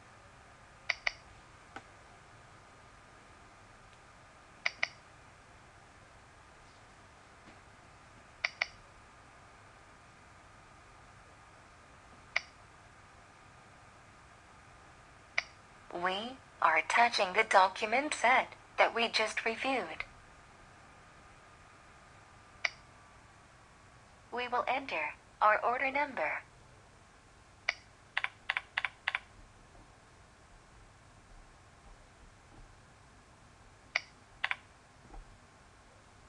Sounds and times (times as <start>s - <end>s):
Computer keyboard: 0.9s - 1.2s, 4.6s - 5.0s, 8.4s - 8.8s, 27.7s - 29.3s, 34.0s - 34.7s.